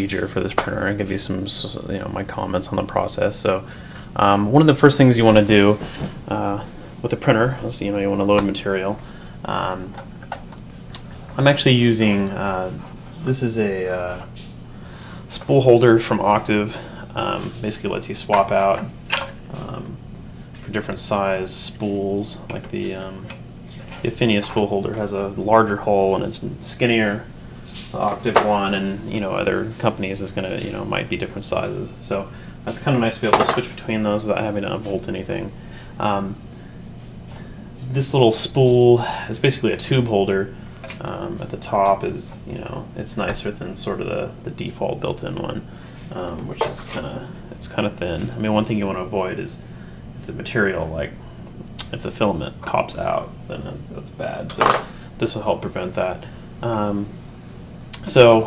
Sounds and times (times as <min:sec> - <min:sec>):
Speech: 0:00.0 - 0:10.0, 0:11.4 - 0:14.3, 0:15.3 - 0:20.0, 0:20.6 - 0:36.4, 0:37.8 - 0:51.2, 0:51.8 - 0:57.2, 0:58.0 - 0:58.4.